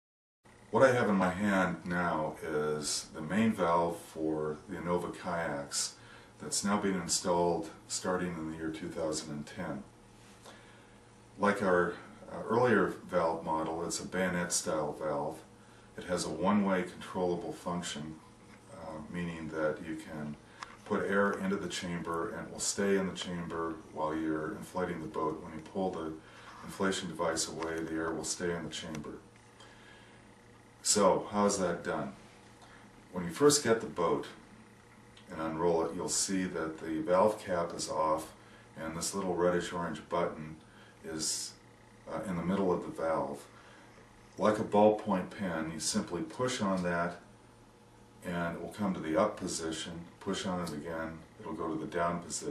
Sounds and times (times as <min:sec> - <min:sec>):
Speech: 0:00.7 - 0:09.9, 0:11.4 - 0:29.3, 0:30.8 - 0:32.2, 0:33.1 - 0:34.5, 0:35.2 - 0:43.5, 0:44.4 - 0:47.3, 0:48.2 - 0:52.5.